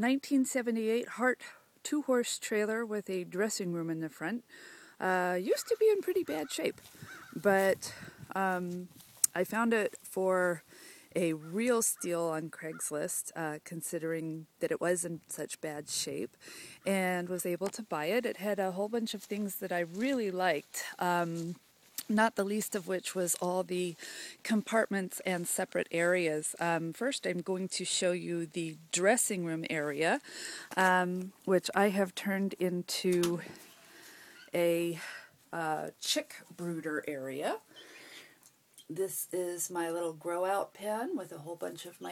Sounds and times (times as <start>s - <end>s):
Speech: 0.0s - 4.4s, 5.0s - 6.8s, 7.4s - 10.6s, 11.2s - 16.3s, 16.9s - 30.2s, 30.8s - 33.6s, 34.6s - 35.0s, 35.6s - 37.6s, 38.9s - 42.1s.